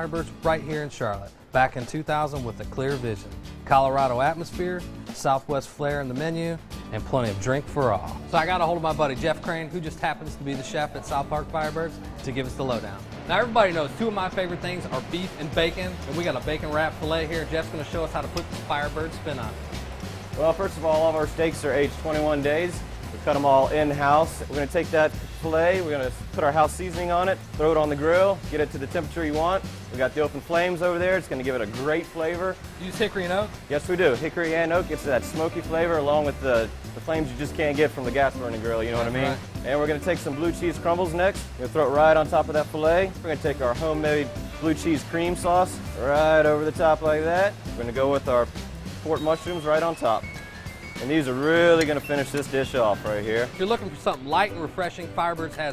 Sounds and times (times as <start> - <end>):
Speech: 0.0 - 19.6, 20.4 - 50.2, 51.0 - 55.7
Music: 0.0 - 55.7.